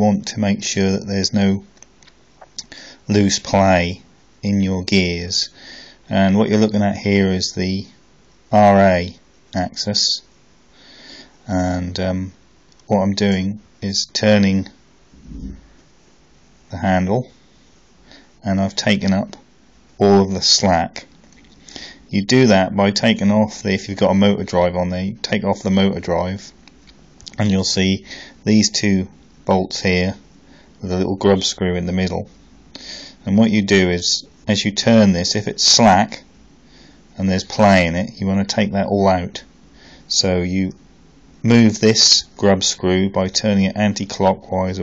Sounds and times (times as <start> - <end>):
Speech: 0.0 - 1.7, 3.1 - 10.3, 11.5 - 15.6, 16.7 - 17.4, 18.4 - 19.4, 20.0 - 21.1, 22.1 - 26.6, 27.3 - 30.2, 30.8 - 32.4, 33.2 - 36.3, 37.2 - 39.5, 40.1 - 40.8, 41.4 - 44.8.